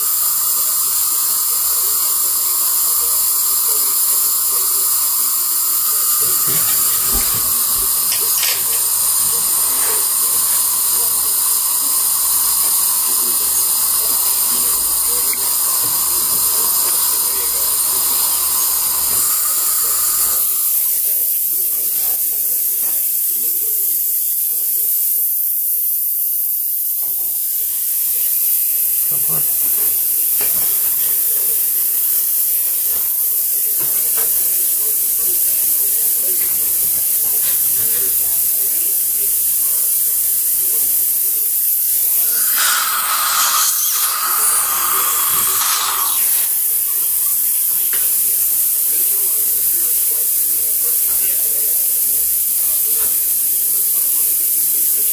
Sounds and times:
Electric toothbrush: 0:00.0 - 0:55.1.

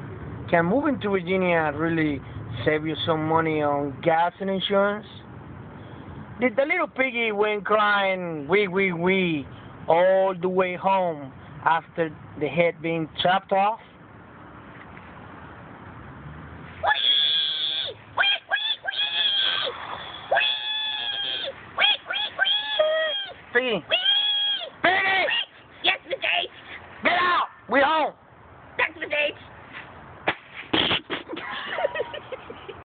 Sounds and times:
Speech: 0:00.5 - 0:05.2, 0:06.4 - 0:13.8, 0:23.5 - 0:23.9, 0:25.9 - 0:28.2.

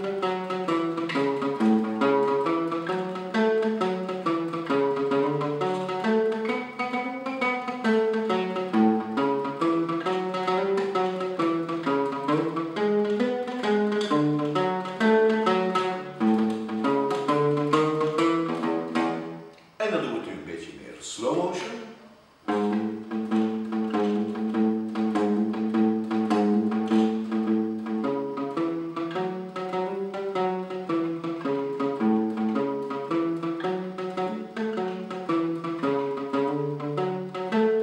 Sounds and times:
Guitar: 0:00.0 - 0:37.8.

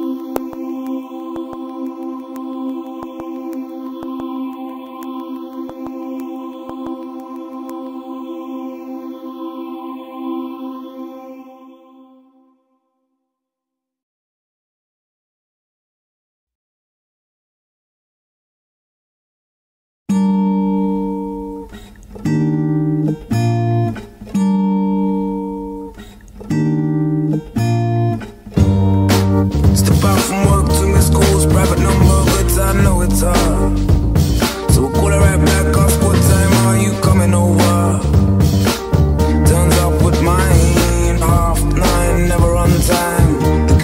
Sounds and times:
Music: 0:00.0 - 0:13.9, 0:20.1 - 0:43.8.

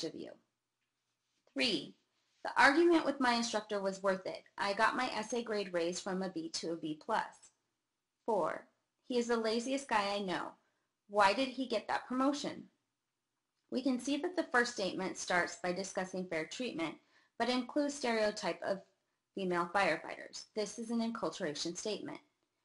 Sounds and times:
Speech: 0:00.0 - 0:00.4, 0:01.6 - 0:07.5, 0:08.3 - 0:12.8, 0:13.7 - 0:22.3.

